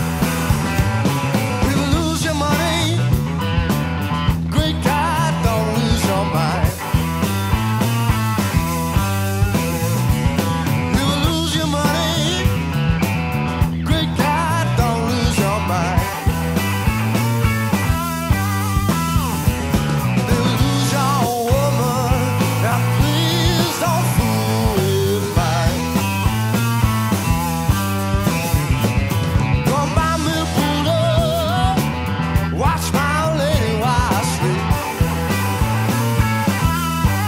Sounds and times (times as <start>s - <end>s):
Grunge: 0.0s - 37.2s
Punk rock: 0.0s - 37.2s.